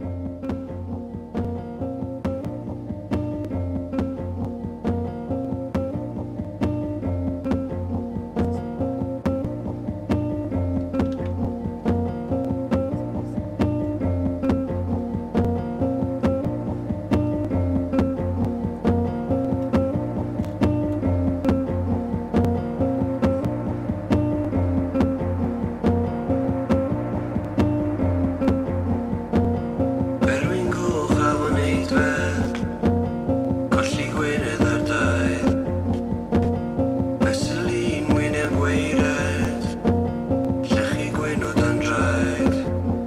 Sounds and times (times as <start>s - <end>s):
Music: 0.0s - 43.0s.